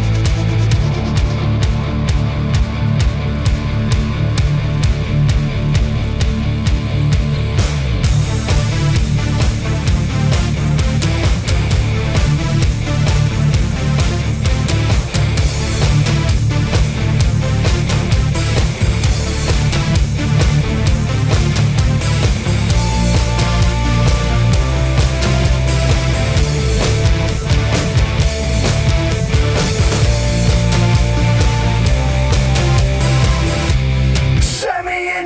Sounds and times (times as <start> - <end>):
Music: 0.0 - 35.2.